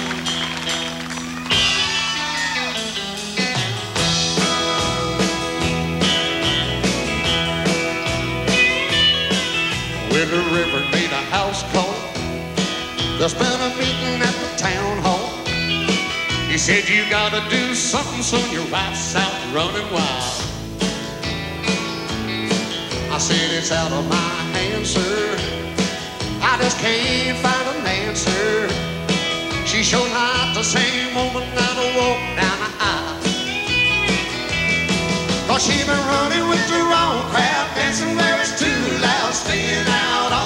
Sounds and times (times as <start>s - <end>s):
Ska: 0.0s - 40.4s.